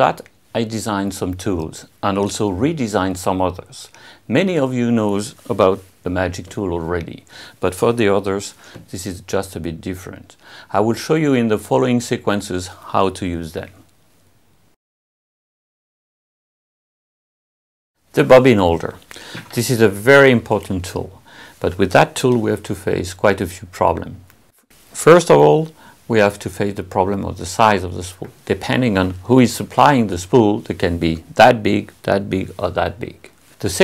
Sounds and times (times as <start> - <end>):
Speech: 0.0 - 13.9, 18.1 - 24.3, 25.0 - 33.8.